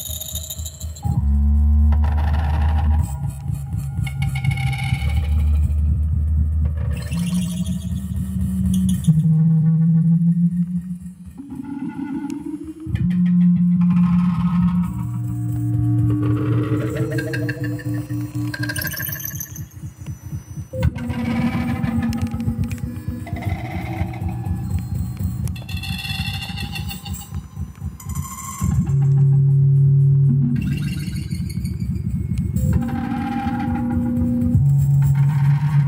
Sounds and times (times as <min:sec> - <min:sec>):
Synthesizer: 0:00.0 - 0:35.8.